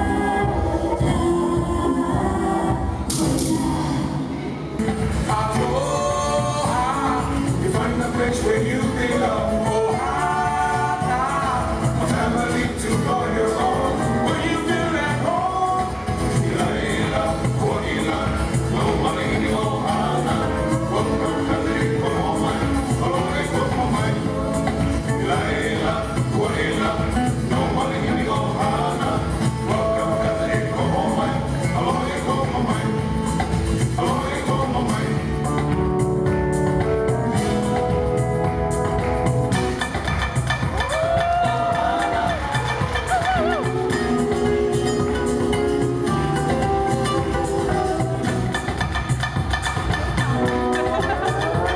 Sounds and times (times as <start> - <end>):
Music of Latin America: 0.0 - 51.7.